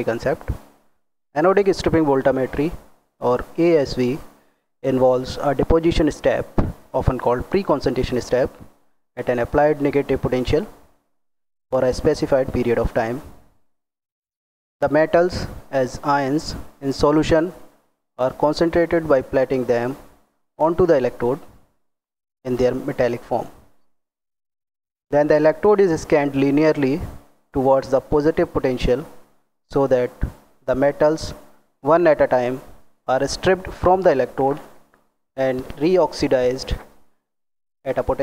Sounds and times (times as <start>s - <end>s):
Speech: 0.0s - 0.6s, 1.4s - 8.6s, 9.2s - 10.8s, 11.8s - 13.3s, 14.8s - 17.6s, 18.2s - 20.0s, 20.6s - 21.5s, 22.5s - 23.6s, 25.1s - 34.7s, 35.4s - 36.9s, 37.9s - 38.2s.